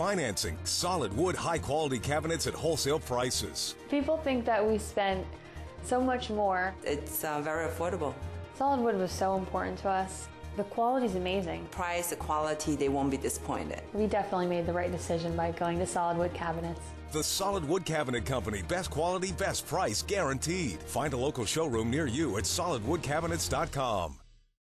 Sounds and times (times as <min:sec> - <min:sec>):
Music: 0:00.0 - 0:24.6
Speech: 0:17.2 - 0:24.2.